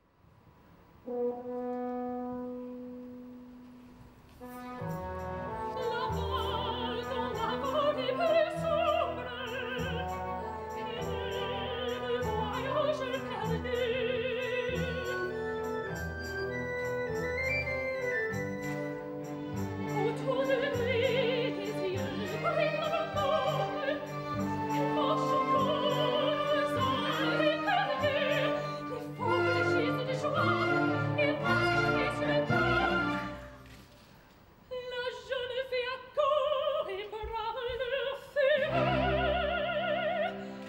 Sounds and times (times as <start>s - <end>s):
Music: 0.8s - 34.1s, 34.8s - 40.6s.